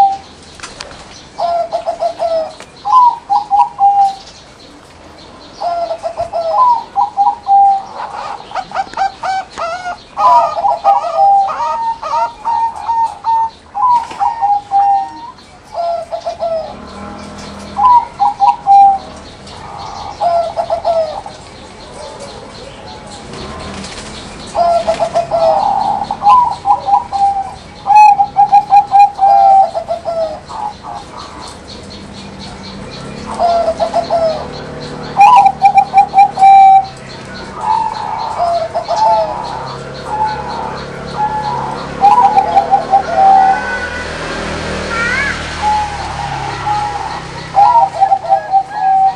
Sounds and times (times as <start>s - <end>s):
Coo: 0.0s - 0.2s, 0.8s - 4.2s, 5.6s - 17.1s, 17.7s - 19.0s, 19.8s - 31.4s, 33.3s - 34.6s, 35.2s - 37.0s, 37.6s - 44.0s, 45.0s - 49.1s.